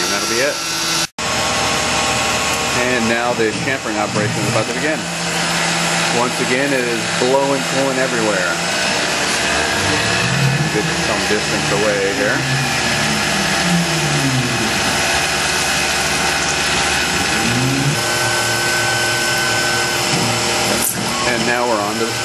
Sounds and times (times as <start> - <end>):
Speech: 0.0 - 0.6, 2.8 - 5.1, 6.1 - 8.6, 10.7 - 12.4, 20.7 - 22.2
Drill: 0.0 - 22.2.